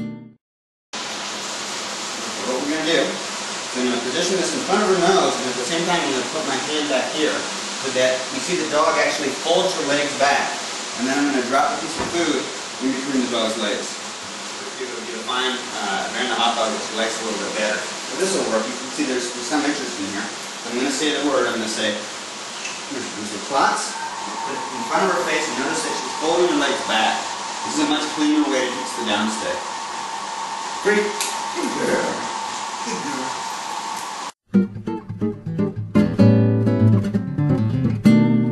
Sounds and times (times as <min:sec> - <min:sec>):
Music: 0:00.0 - 0:00.4, 0:34.5 - 0:38.5
Speech: 0:02.4 - 0:14.0, 0:14.6 - 0:22.1, 0:22.9 - 0:29.6, 0:30.8 - 0:32.3, 0:32.9 - 0:33.4.